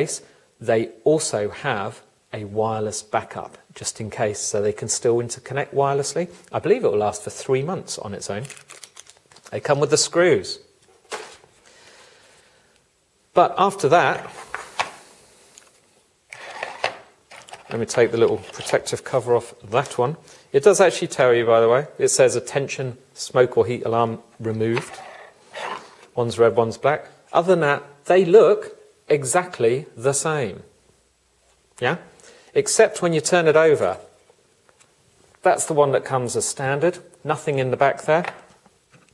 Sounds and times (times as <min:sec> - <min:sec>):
Speech: 0:00.0 - 0:08.6, 0:09.5 - 0:10.7, 0:13.4 - 0:14.3, 0:17.7 - 0:25.0, 0:26.2 - 0:30.7, 0:31.8 - 0:34.2, 0:35.4 - 0:38.4.